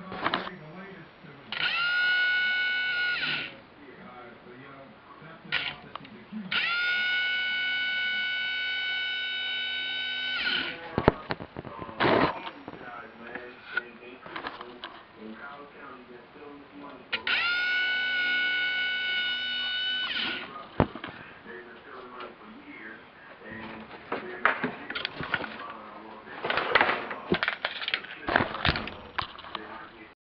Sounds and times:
Speech: 0.0 - 1.6, 3.5 - 7.1, 10.7 - 17.4, 20.4 - 30.2.

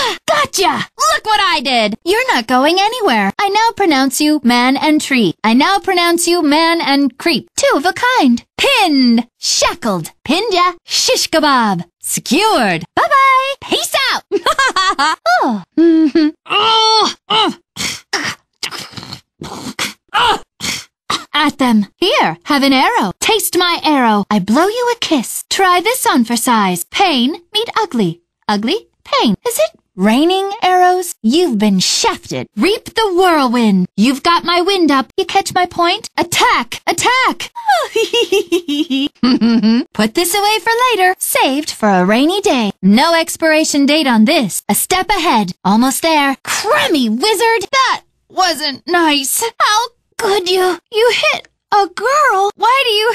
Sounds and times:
Speech: 0.0 - 14.4, 15.2 - 17.6, 21.2 - 53.1.

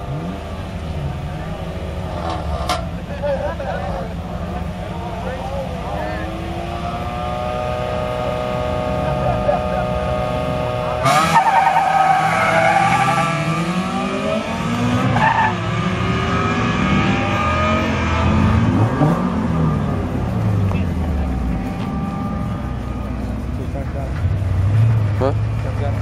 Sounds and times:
Car: 0.0 - 26.0
Speech: 3.1 - 6.4, 25.2 - 26.0.

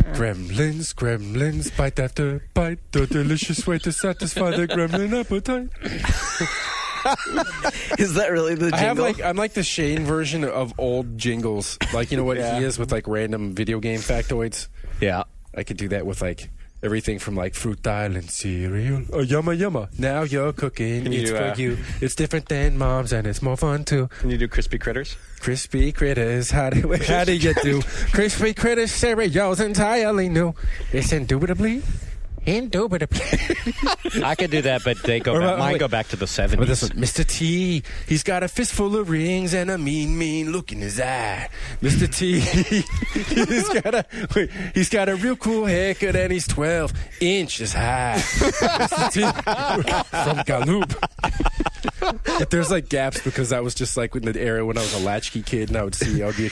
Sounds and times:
Speech: 0.0 - 5.8, 8.0 - 31.8, 34.1 - 42.7, 43.4 - 51.0, 52.3 - 56.5.

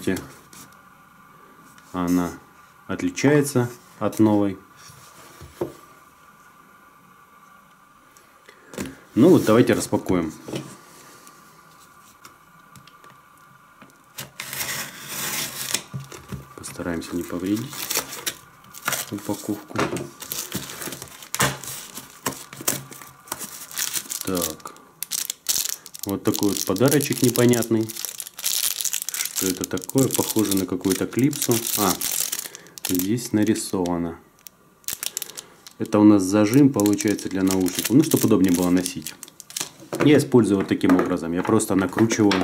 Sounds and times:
Speech: 0.0 - 0.4, 1.9 - 4.7, 9.2 - 10.4, 16.6 - 17.8, 19.1 - 19.9, 24.2 - 24.7, 26.1 - 28.0, 29.4 - 32.1, 32.9 - 34.3, 35.8 - 39.2, 40.0 - 42.4.

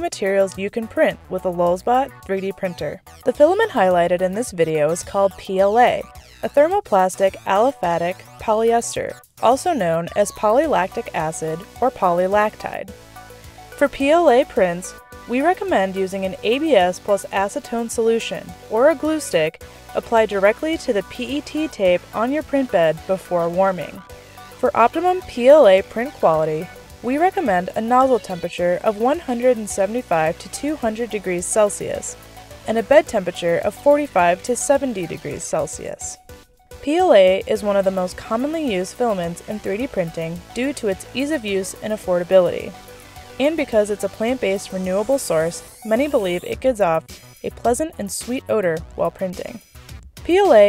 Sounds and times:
Speech: 0.0 - 12.9, 13.8 - 24.0, 24.6 - 32.1, 32.7 - 36.2, 36.8 - 42.8, 43.4 - 49.6, 50.3 - 50.6
Music: 0.0 - 50.6.

